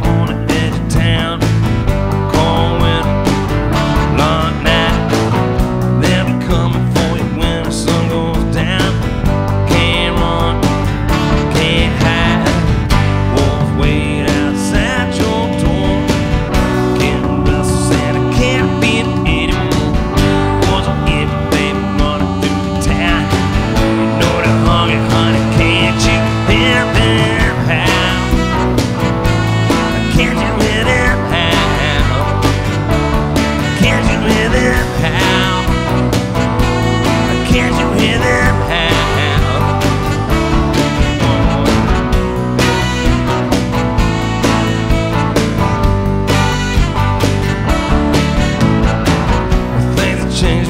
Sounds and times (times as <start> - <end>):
Music: 0.0 - 50.7.